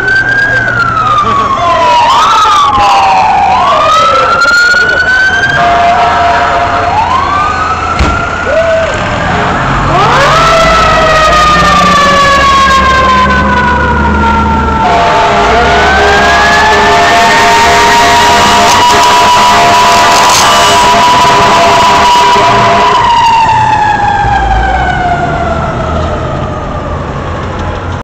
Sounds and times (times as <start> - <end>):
Vehicle: 0.0 - 28.0.